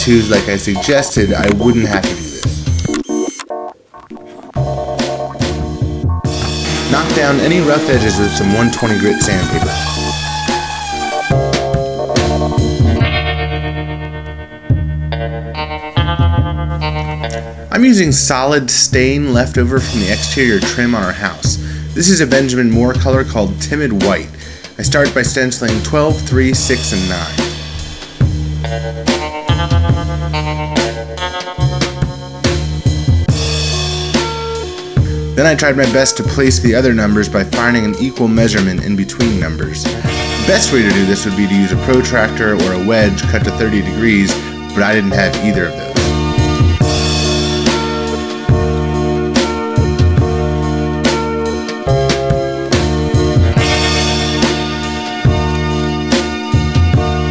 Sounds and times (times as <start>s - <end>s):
Speech: 0.0s - 2.4s, 6.9s - 9.9s, 17.7s - 27.4s, 35.4s - 45.8s
Music: 0.0s - 57.3s.